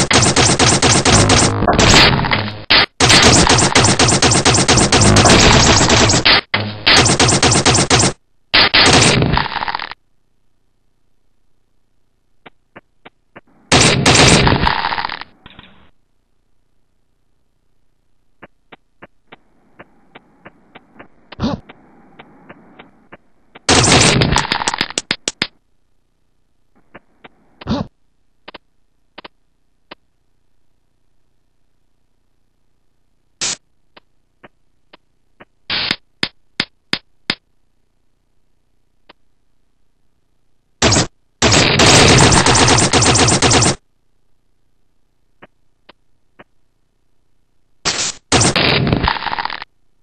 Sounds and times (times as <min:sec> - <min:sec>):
Machine gun: 0:00.0 - 0:09.6, 0:13.7 - 0:15.1, 0:23.7 - 0:24.9, 0:40.8 - 0:43.8, 0:47.9 - 0:49.3.